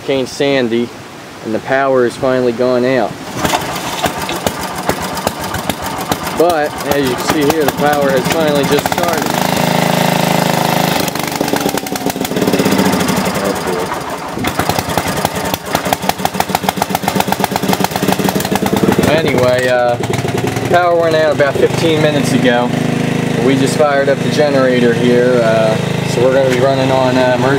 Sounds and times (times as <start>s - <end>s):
Speech: 0.0s - 3.2s, 6.4s - 9.3s, 19.0s - 20.0s, 20.7s - 22.7s, 23.4s - 27.5s.